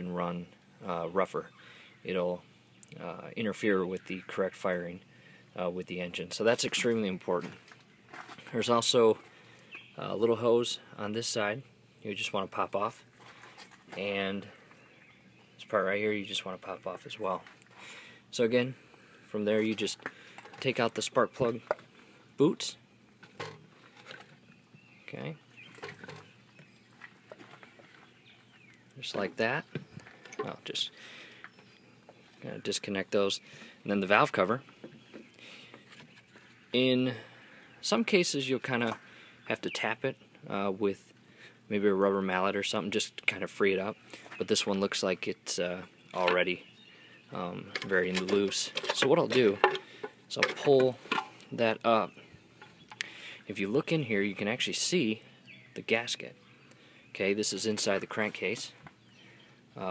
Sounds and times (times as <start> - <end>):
Speech: 0.0 - 1.5, 2.1 - 5.0, 5.6 - 7.6, 8.4 - 9.2, 10.0 - 13.0, 13.9 - 14.6, 15.6 - 17.5, 18.3 - 20.0, 20.6 - 21.7, 22.4 - 22.8, 25.1 - 25.4, 29.0 - 29.8, 30.4 - 31.0, 32.4 - 34.6, 36.7 - 41.1, 41.7 - 46.6, 47.3 - 49.7, 50.3 - 52.2, 53.5 - 55.2, 55.8 - 56.4, 57.1 - 58.8.